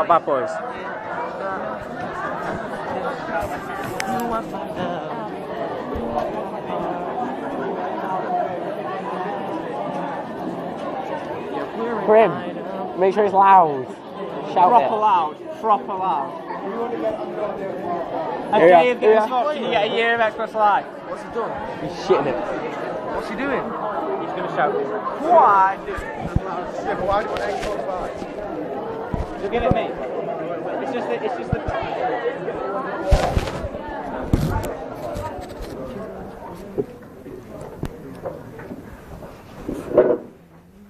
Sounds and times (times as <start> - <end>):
Speech: 0.0 - 38.8.